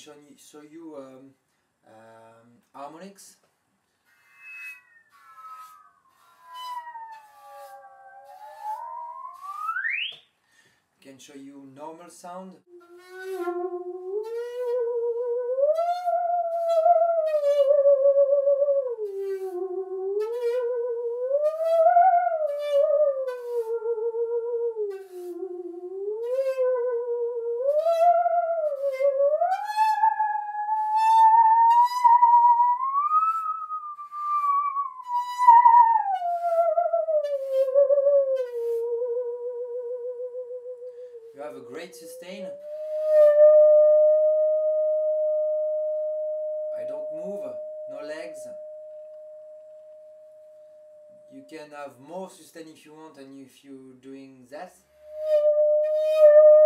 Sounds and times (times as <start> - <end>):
Speech: 0.0 - 3.4, 11.0 - 12.7, 41.4 - 42.6, 46.8 - 48.6, 51.3 - 54.8.